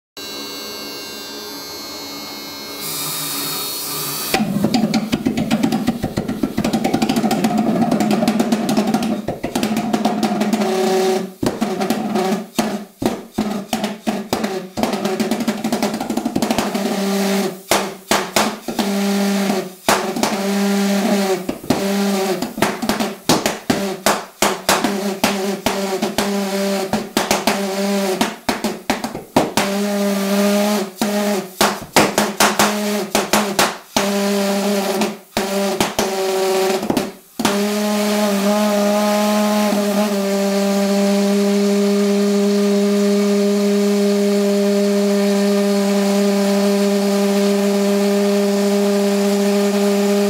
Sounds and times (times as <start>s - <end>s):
Electric shaver, electric razor: 0.2s - 4.4s.